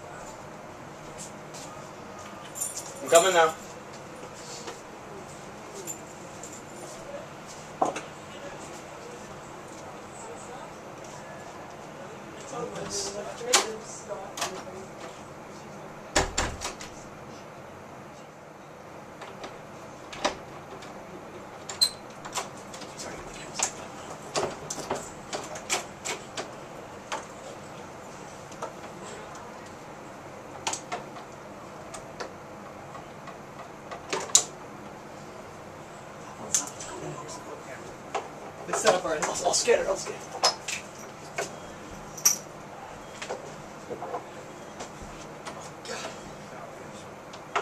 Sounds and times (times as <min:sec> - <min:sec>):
Speech: 0:03.0 - 0:03.6, 0:08.2 - 0:16.0, 0:36.3 - 0:38.0, 0:38.6 - 0:40.4
Door: 0:16.2 - 0:16.9.